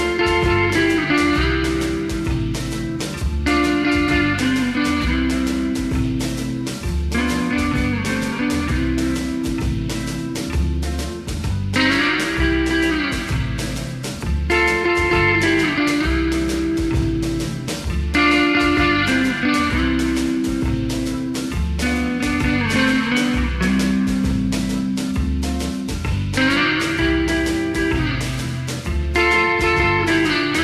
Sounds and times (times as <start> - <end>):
Blues: 0.0 - 30.6.